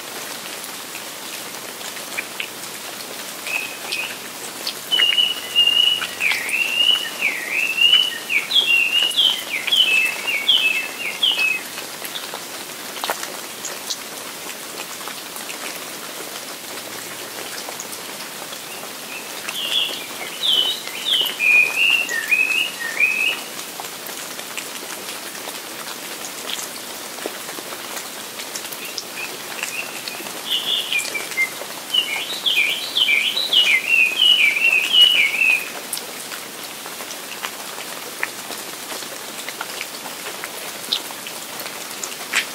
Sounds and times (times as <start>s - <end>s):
Rain on surface: 0.0s - 42.5s.